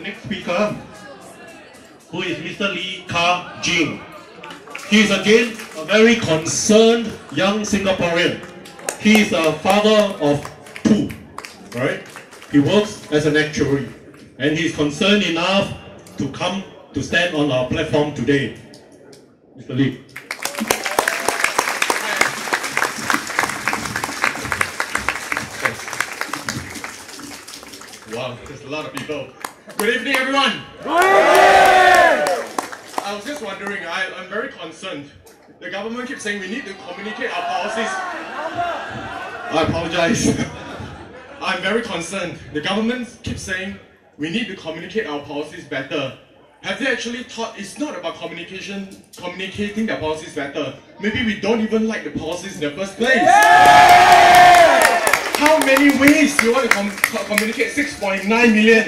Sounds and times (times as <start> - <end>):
Male speech, man speaking: 0.0 - 0.9, 2.1 - 4.0, 4.8 - 18.6, 19.6 - 20.0, 28.1 - 30.7, 33.0 - 38.2, 39.5 - 40.6, 41.4 - 53.3, 55.3 - 58.8.